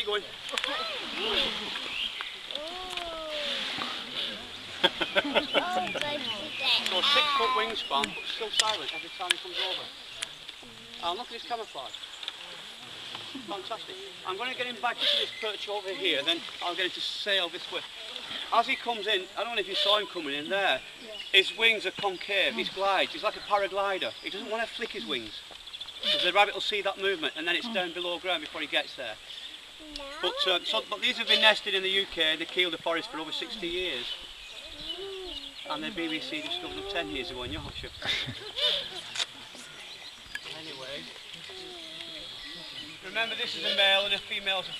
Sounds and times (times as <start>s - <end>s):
Bird: 13.3s - 16.4s, 18.0s - 28.0s, 33.0s - 44.7s.